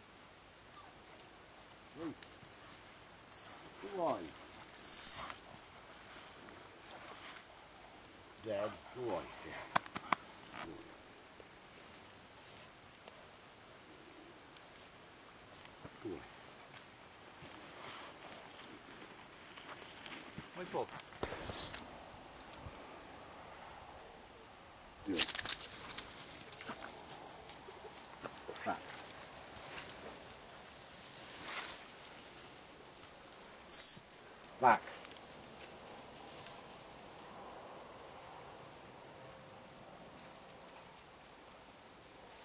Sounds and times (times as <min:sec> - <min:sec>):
Outside, rural or natural: 0:00.0 - 0:42.4
Speech: 0:02.0 - 0:02.2, 0:03.8 - 0:04.4, 0:08.4 - 0:09.7, 0:20.6 - 0:20.9, 0:28.5 - 0:28.8, 0:34.6 - 0:34.8
Animal: 0:03.3 - 0:05.4, 0:16.0 - 0:16.4, 0:25.1 - 0:30.3.